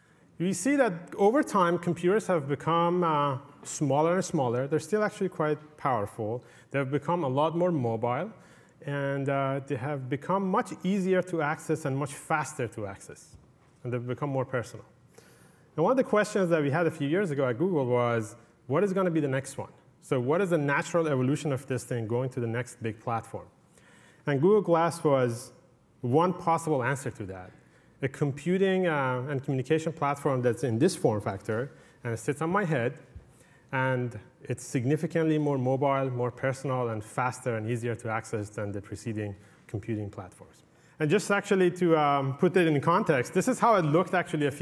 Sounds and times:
Speech: 0.4 - 14.9, 15.8 - 23.5, 24.2 - 33.0, 33.7 - 44.6.

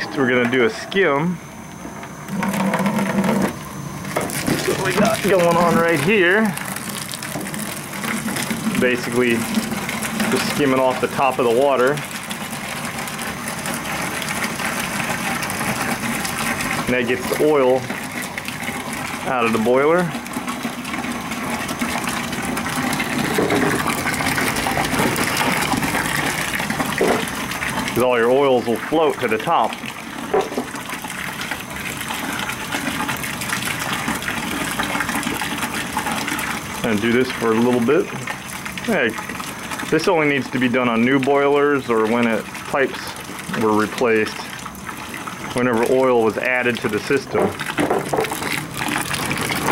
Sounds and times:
Water: 0.0 - 49.7
Water tap, faucet: 2.3 - 49.7.

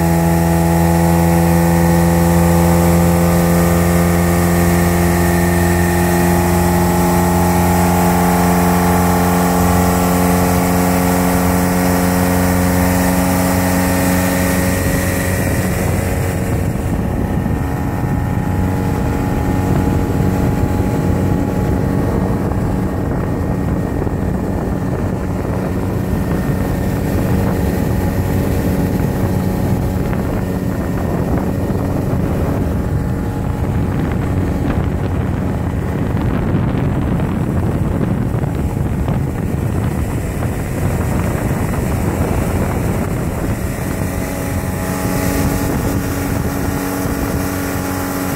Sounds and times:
Motorboat, speedboat: 0.0 - 48.3.

